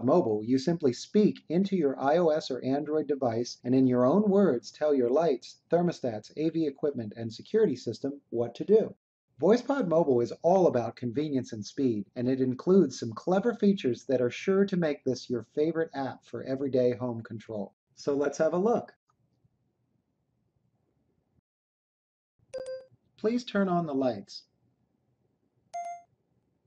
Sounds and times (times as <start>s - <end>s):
Male speech, man speaking: 0.0s - 19.0s, 23.2s - 24.4s.